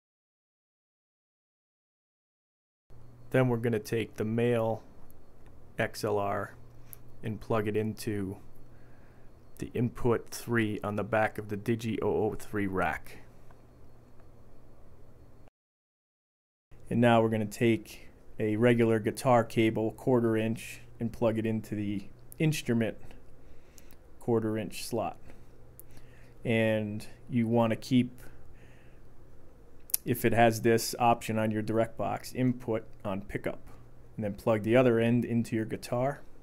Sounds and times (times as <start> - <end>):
Speech: 3.3 - 4.9, 5.8 - 6.6, 7.2 - 8.5, 9.6 - 13.3, 16.8 - 23.2, 24.2 - 25.3, 26.4 - 28.4, 30.0 - 36.3.